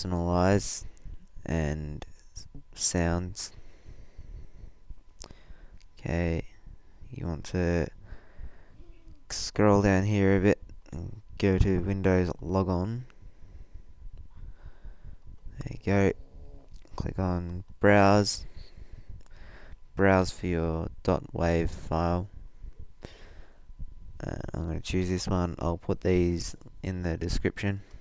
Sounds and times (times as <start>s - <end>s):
Speech: 0.0s - 3.6s, 6.0s - 6.5s, 7.1s - 8.0s, 9.3s - 13.1s, 15.6s - 16.2s, 16.9s - 18.5s, 20.0s - 22.3s, 24.2s - 27.8s.